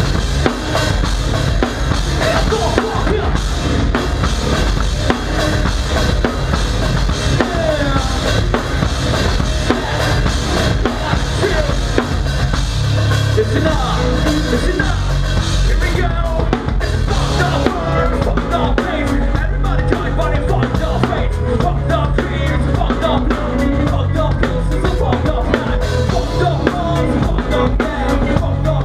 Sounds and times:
Drum: 0.0s - 28.8s
Drum kit: 0.0s - 28.8s.

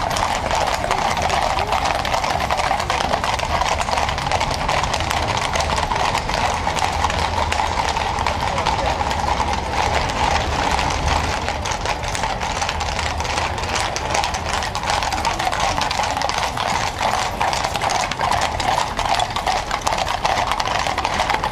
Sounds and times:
Clip-clop: 0.0s - 21.5s
Speech: 0.7s - 3.3s, 8.0s - 10.0s.

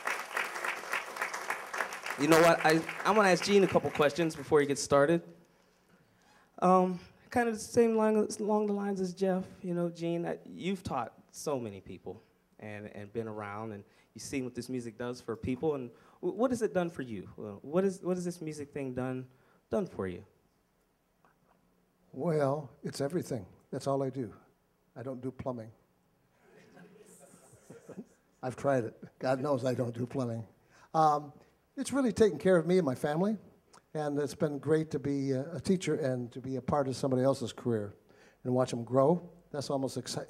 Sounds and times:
Speech: 2.2s - 5.3s, 6.6s - 20.3s, 22.2s - 24.4s, 25.0s - 25.8s, 28.4s - 40.2s.

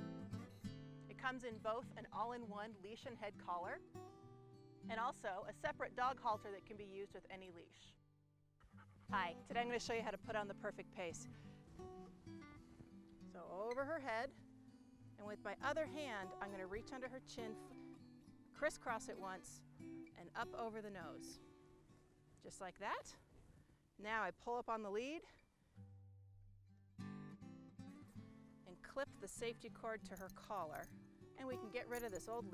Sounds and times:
Music: 0.0s - 8.0s, 8.6s - 32.5s
Speech: 1.1s - 3.8s, 4.9s - 8.0s, 9.1s - 11.3s, 13.3s - 14.4s, 15.2s - 17.6s, 18.6s - 19.6s, 20.2s - 21.4s, 22.4s - 23.2s, 24.0s - 25.4s, 28.7s - 32.5s.

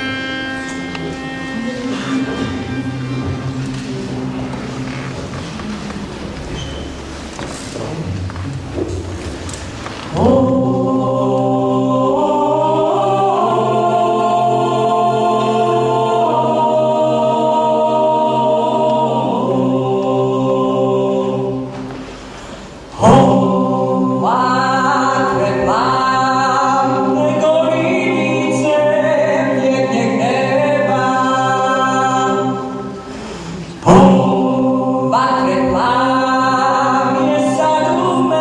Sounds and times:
A capella: 10.0s - 38.4s
Choir: 10.0s - 38.4s.

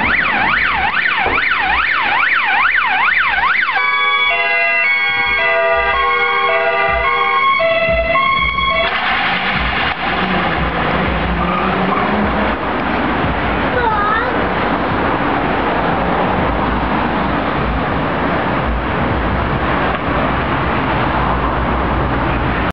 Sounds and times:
Speech: 13.7s - 14.4s
Car passing by: 14.4s - 22.7s.

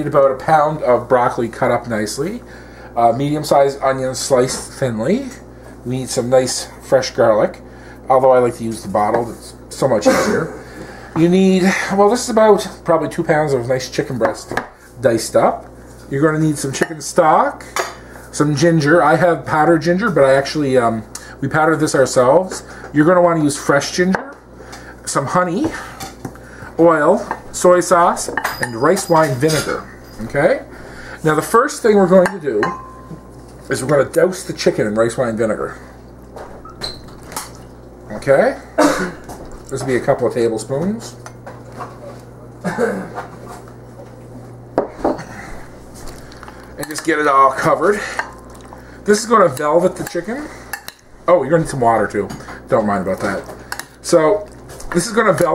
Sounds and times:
Speech: 0.0s - 10.6s, 11.2s - 17.7s, 18.3s - 24.4s, 25.0s - 25.9s, 26.8s - 32.8s, 33.7s - 35.9s, 38.1s - 38.7s, 39.7s - 41.2s, 46.8s - 48.2s, 49.1s - 50.6s, 51.3s - 55.5s.

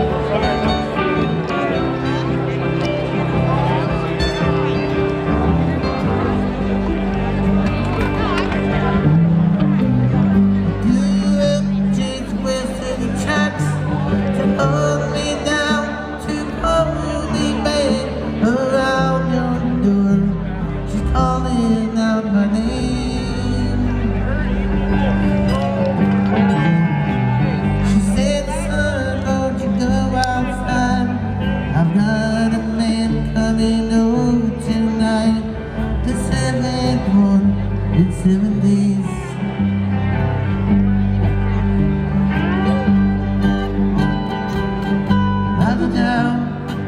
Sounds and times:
Speech: 0.0s - 26.7s
Music: 0.0s - 46.8s.

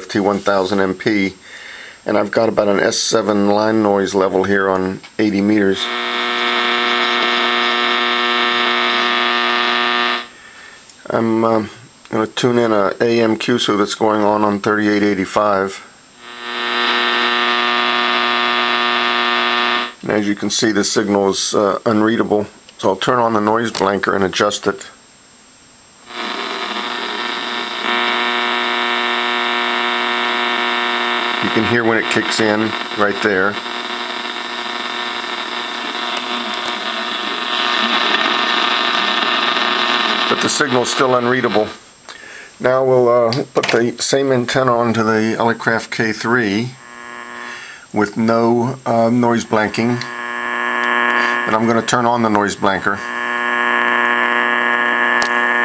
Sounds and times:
Radio: 0.0s - 1.4s, 2.1s - 10.4s, 11.0s - 25.0s, 26.0s - 55.6s
Speech: 0.0s - 1.4s, 2.1s - 5.9s, 11.0s - 15.9s, 20.0s - 25.0s, 31.4s - 33.6s, 40.3s - 41.8s, 42.6s - 46.8s, 47.9s - 50.1s, 51.5s - 53.0s
Noise: 0.0s - 55.6s.

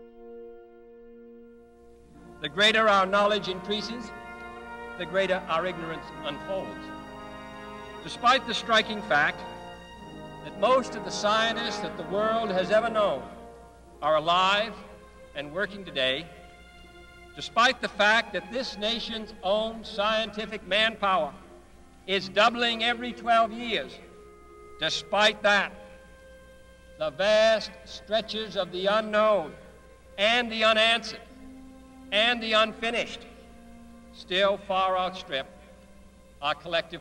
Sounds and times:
Narration, monologue: 1.8s - 37.0s
Male speech, man speaking: 2.4s - 4.1s, 5.0s - 6.9s, 8.0s - 9.4s, 10.5s - 13.3s, 14.0s - 16.3s, 17.4s - 21.4s, 22.1s - 24.0s, 24.8s - 25.8s, 27.0s - 29.6s, 30.2s - 31.2s, 32.2s - 33.3s, 34.2s - 35.5s, 36.4s - 37.0s.

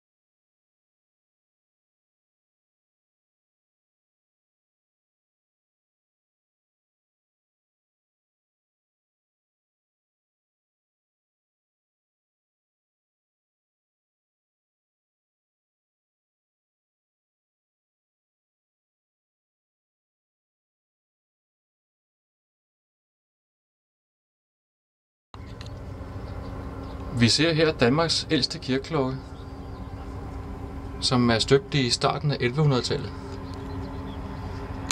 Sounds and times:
Speech: 27.1s - 29.3s, 31.0s - 33.2s.

